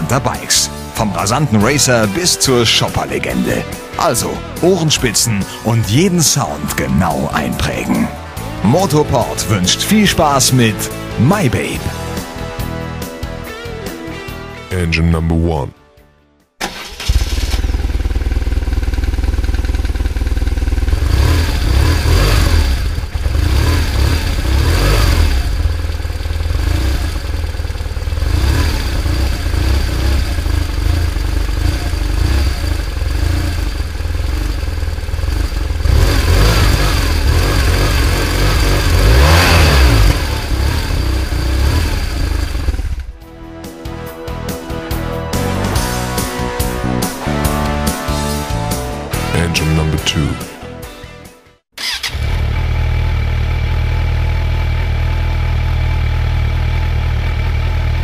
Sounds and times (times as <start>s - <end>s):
Speech: 0.0s - 11.9s, 14.7s - 15.8s, 49.2s - 50.6s
Music: 0.0s - 17.9s, 43.0s - 52.1s.